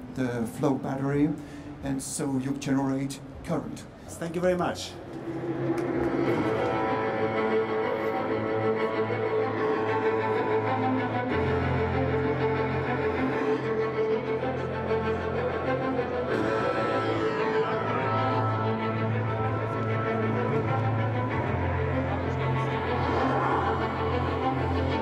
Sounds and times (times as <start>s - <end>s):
Cello: 5.1s - 25.0s.